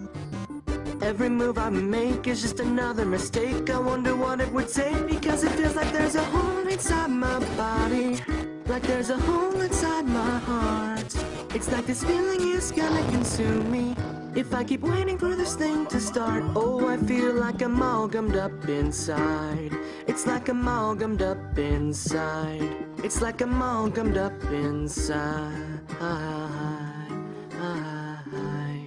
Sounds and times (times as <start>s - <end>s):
Music: 0.0s - 28.8s.